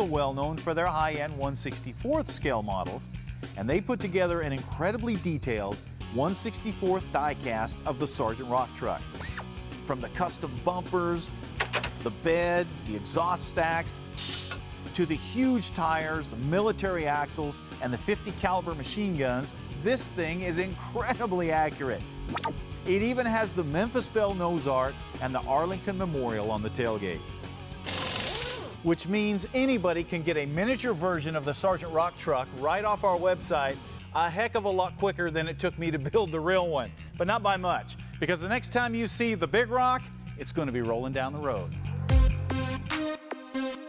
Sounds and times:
Speech: 0.0s - 9.0s, 9.9s - 11.3s, 12.0s - 14.0s, 15.0s - 22.0s, 22.9s - 27.2s, 28.9s - 41.7s
Music: 0.0s - 43.8s.

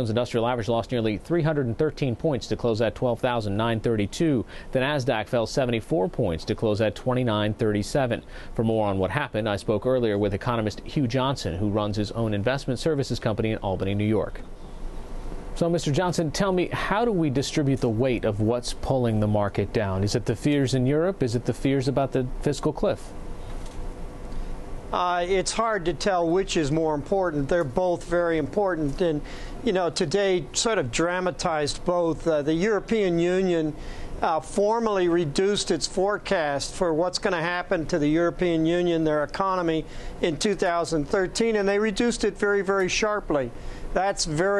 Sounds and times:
Speech: 0.0s - 14.4s, 15.6s - 23.1s, 25.0s - 44.5s.

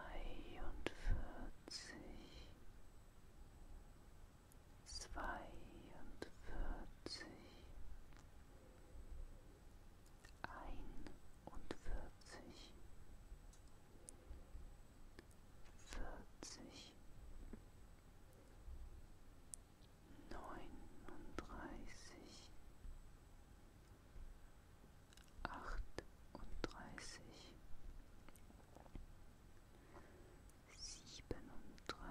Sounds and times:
Whispering: 0.0s - 2.6s, 4.8s - 7.8s, 10.2s - 12.9s, 15.2s - 17.0s, 20.1s - 22.6s, 25.2s - 27.6s, 30.6s - 32.1s.

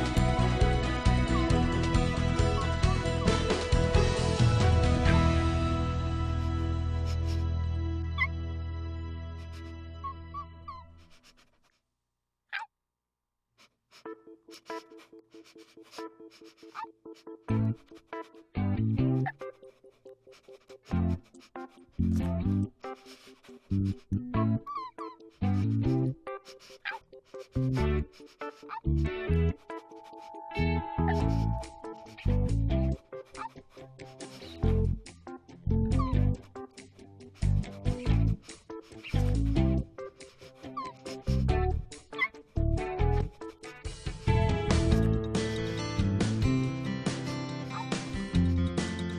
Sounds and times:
Music: 0.0s - 11.1s, 13.9s - 49.1s
Dog: 13.6s - 18.4s, 22.8s - 25.7s, 26.3s - 32.2s, 33.2s - 34.8s, 35.9s - 36.6s, 40.1s - 41.4s, 42.0s - 42.5s, 47.6s - 48.1s.

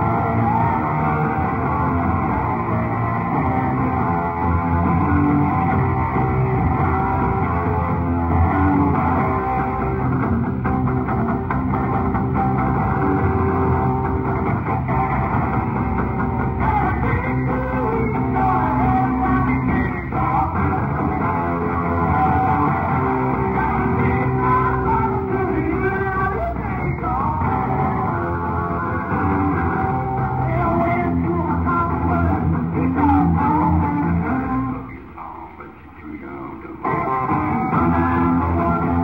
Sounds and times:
Rock music: 0.0s - 39.0s.

